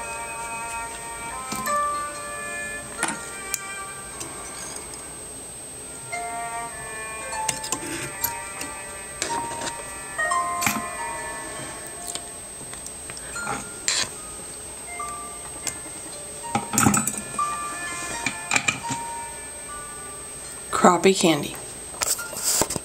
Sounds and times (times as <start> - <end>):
Music: 0.0 - 22.8
Speech: 20.7 - 21.6.